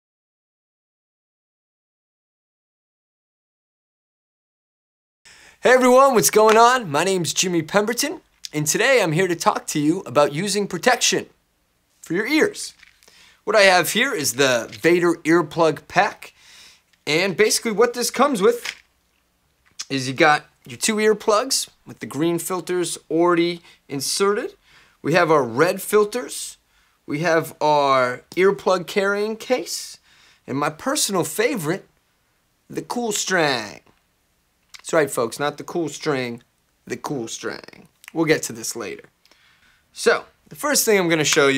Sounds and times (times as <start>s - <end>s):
Speech: 5.6s - 11.4s, 12.0s - 12.8s, 13.5s - 16.3s, 17.0s - 18.7s, 19.8s - 31.9s, 32.7s - 33.9s, 34.8s - 39.1s, 40.0s - 41.5s.